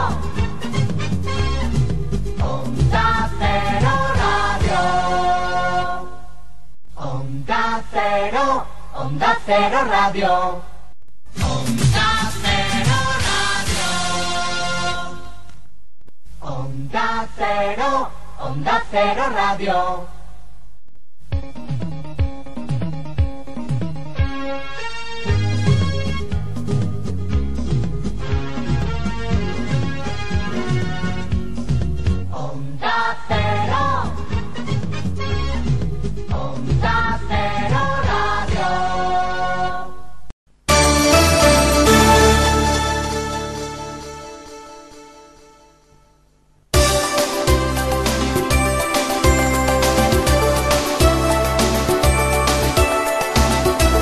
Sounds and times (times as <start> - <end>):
Music: 0.0 - 6.3, 11.4 - 15.5, 21.3 - 40.0, 40.7 - 46.2, 46.8 - 54.0.